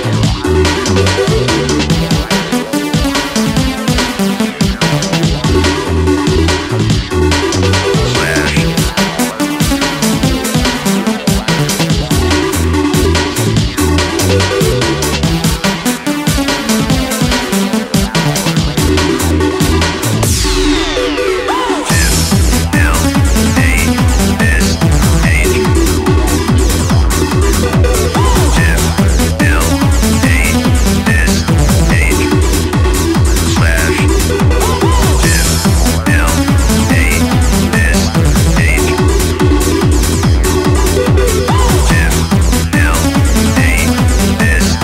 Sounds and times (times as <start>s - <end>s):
Techno: 0.0s - 44.8s.